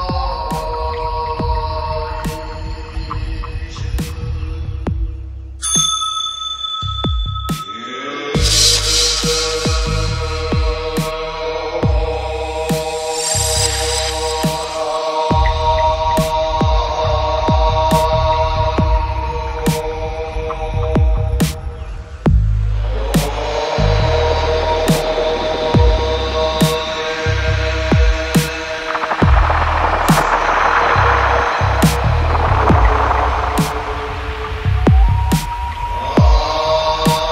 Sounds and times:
Mantra: 0:00.0 - 0:05.2, 0:07.6 - 0:37.3.

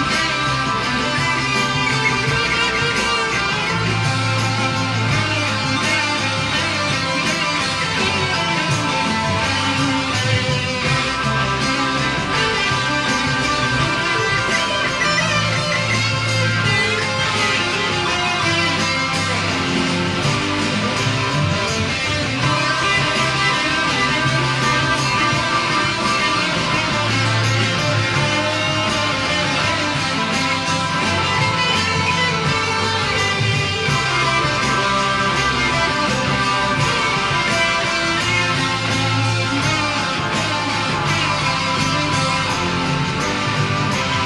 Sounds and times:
Electric guitar: 0:00.0 - 0:44.2
Strum: 0:00.0 - 0:44.2.

